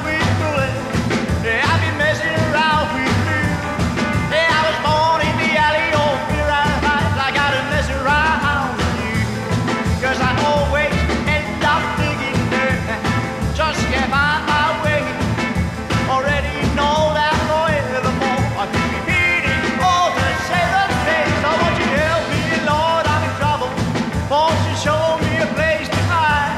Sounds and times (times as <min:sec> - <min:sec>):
Music: 0:00.0 - 0:26.5.